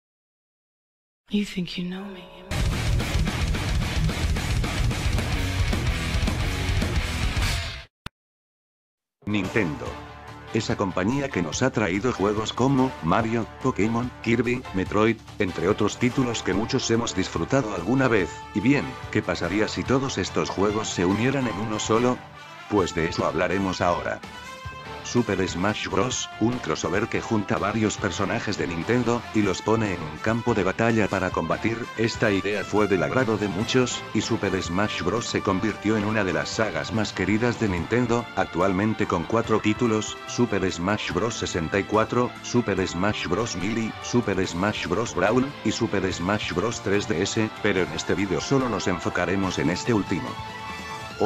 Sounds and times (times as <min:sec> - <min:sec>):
Speech: 0:01.3 - 0:02.5, 0:09.2 - 0:24.2, 0:25.0 - 0:50.4
Music: 0:01.4 - 0:07.9, 0:09.2 - 0:51.2.